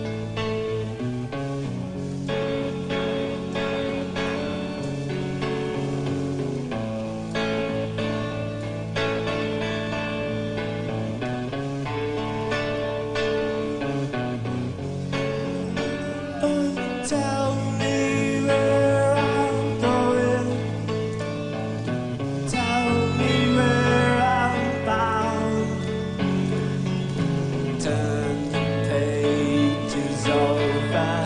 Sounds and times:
Music: 0.0s - 31.2s.

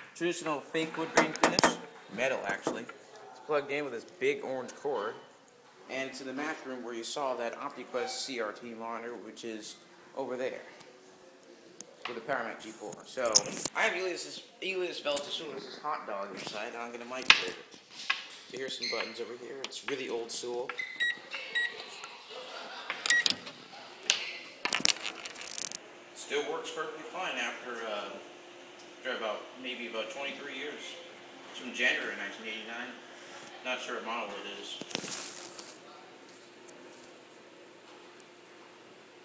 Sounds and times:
Speech: 5.9s - 11.4s, 12.1s - 17.6s, 26.2s - 28.3s, 29.0s - 34.8s.

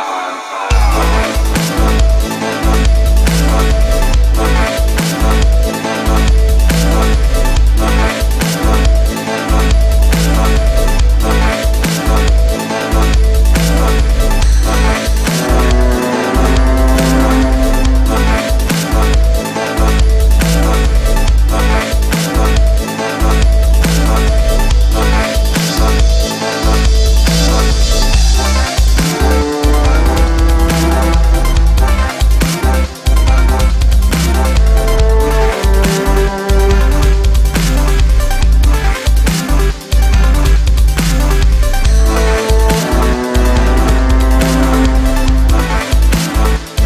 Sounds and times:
Music: 0.0s - 46.8s.

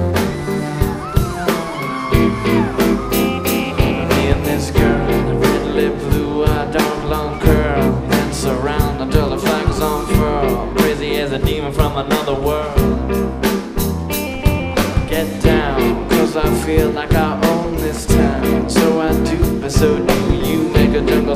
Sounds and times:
Music: 0.0s - 21.3s.

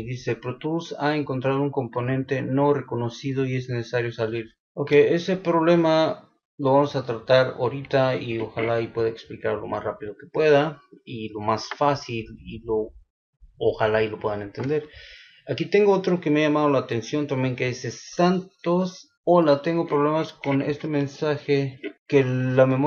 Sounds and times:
Speech: 0.0s - 12.9s, 13.6s - 22.8s.

